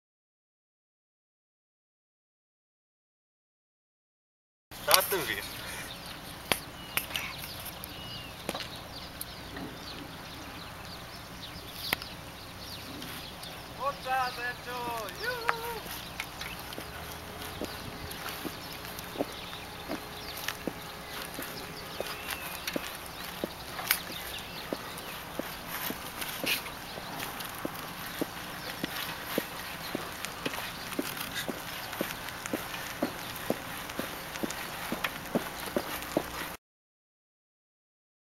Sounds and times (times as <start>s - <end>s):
Bicycle: 15.4s - 36.6s.